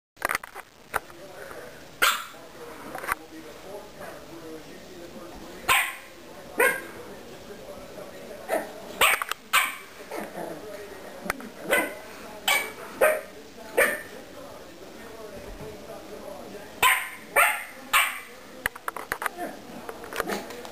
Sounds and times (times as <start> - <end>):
Speech: 0.9 - 20.7
Bark: 2.0 - 2.4, 5.7 - 6.9, 8.5 - 10.3, 11.7 - 14.1, 16.8 - 18.3.